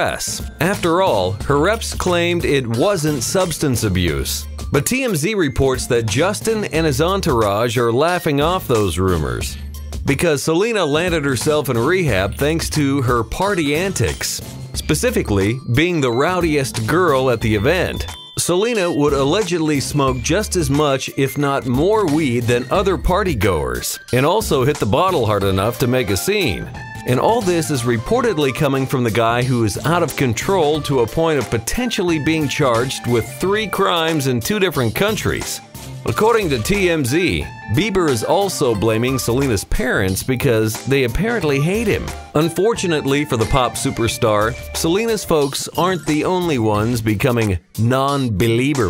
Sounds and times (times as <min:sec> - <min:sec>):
Music: 0:00.0 - 0:48.9
Speech: 0:00.0 - 0:48.9.